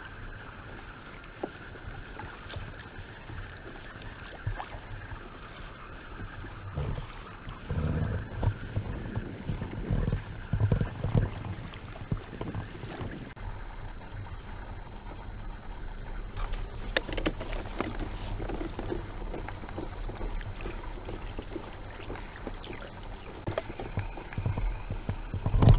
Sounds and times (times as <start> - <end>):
Boat, Water vehicle: 0.0 - 25.7.